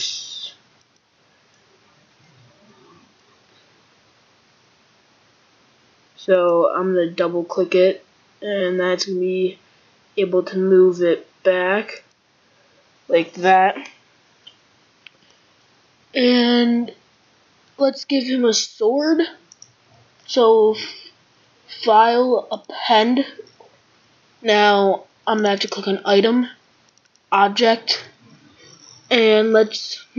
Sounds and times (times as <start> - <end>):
Speech: 0.0 - 0.6, 6.2 - 9.6, 10.2 - 12.1, 13.1 - 13.9, 16.2 - 17.0, 17.8 - 19.4, 20.3 - 21.1, 21.7 - 23.5, 24.4 - 26.6, 27.3 - 30.1.